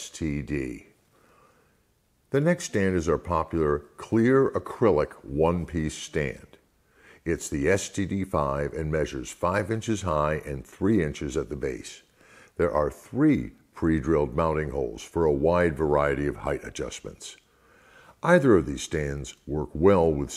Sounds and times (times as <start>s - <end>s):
Speech: 0.0s - 1.0s, 2.3s - 6.6s, 7.2s - 17.4s, 18.2s - 20.3s.